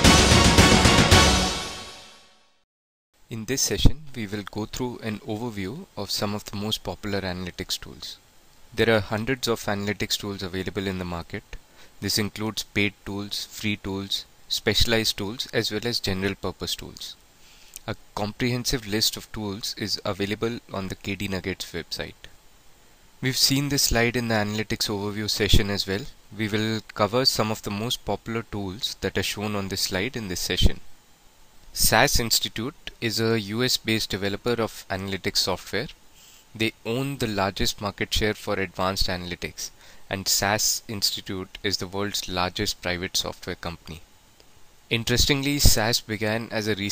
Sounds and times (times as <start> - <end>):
Speech: 3.3 - 17.2, 17.8 - 22.4, 23.2 - 30.9, 31.8 - 36.0, 36.6 - 44.1, 44.9 - 46.9.